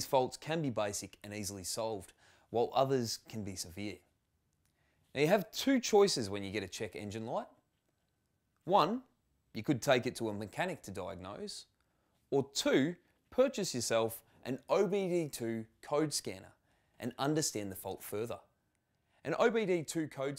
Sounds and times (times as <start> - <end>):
Speech: 0.0 - 4.1, 5.1 - 7.6, 8.6 - 11.7, 12.3 - 18.5, 19.2 - 20.3.